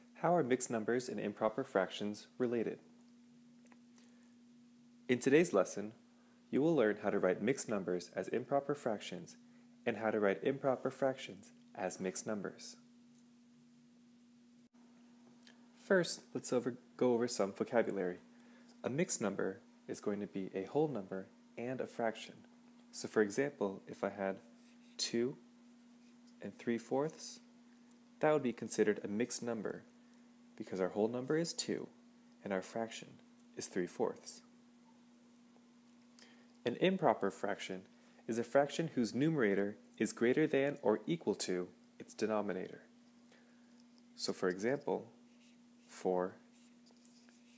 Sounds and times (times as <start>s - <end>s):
Speech: 0.2s - 2.9s, 5.1s - 12.8s, 15.8s - 25.4s, 26.4s - 27.5s, 28.2s - 29.9s, 30.6s - 34.5s, 36.7s - 42.9s, 44.2s - 45.2s, 45.9s - 46.4s.